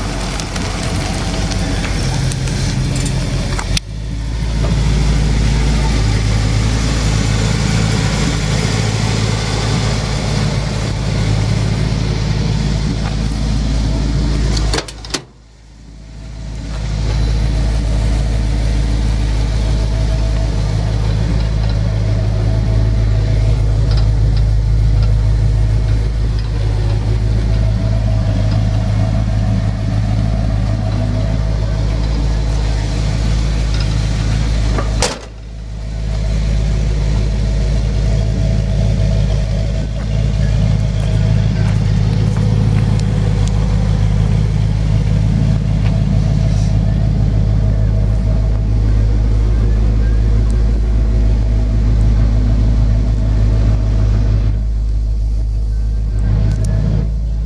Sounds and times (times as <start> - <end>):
Car: 0.0 - 57.4.